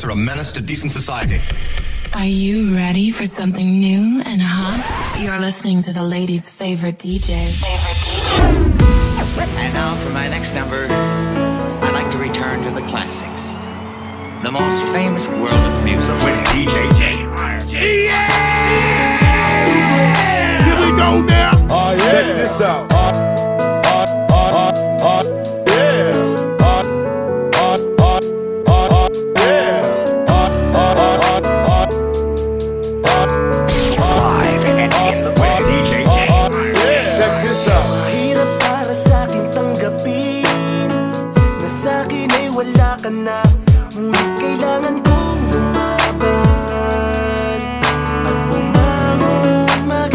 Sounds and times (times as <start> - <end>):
Music: 0.0 - 50.1.